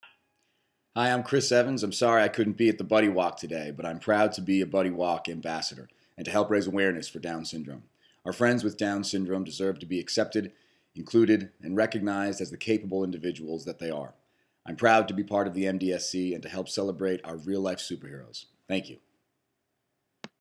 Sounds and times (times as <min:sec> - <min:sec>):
Speech: 0:01.0 - 0:19.0.